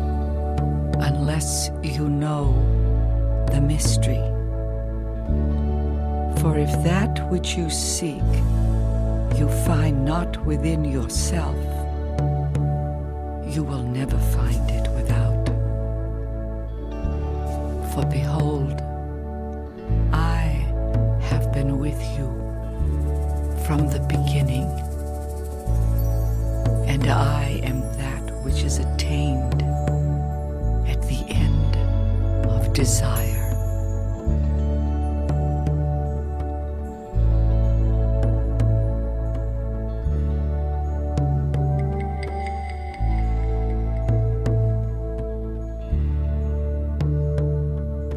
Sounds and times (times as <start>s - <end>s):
New-age music: 0.0s - 48.1s.